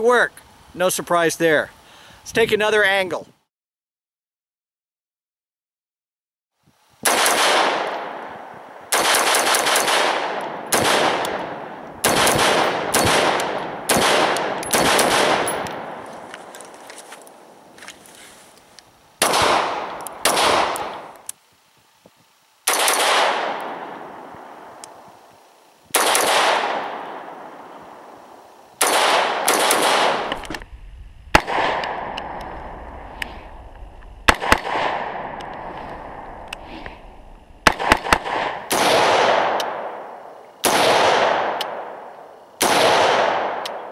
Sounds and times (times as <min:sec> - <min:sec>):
Outside, rural or natural: 0:00.0 - 0:03.5, 0:06.5 - 0:43.9.